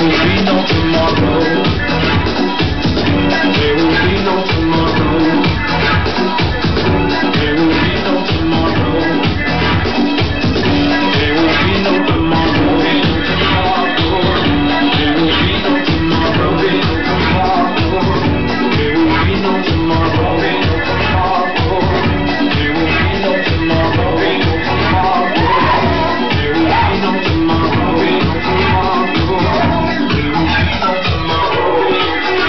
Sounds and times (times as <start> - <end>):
House music: 0.0 - 32.4.